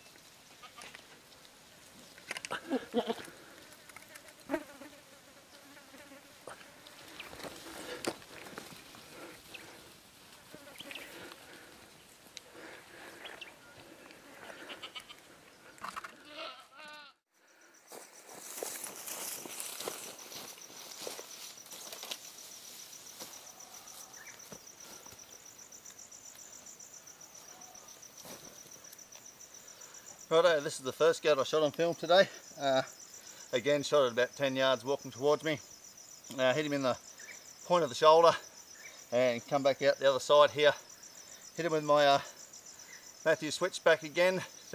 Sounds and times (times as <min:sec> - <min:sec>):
Environmental noise: 0:00.0 - 0:44.7.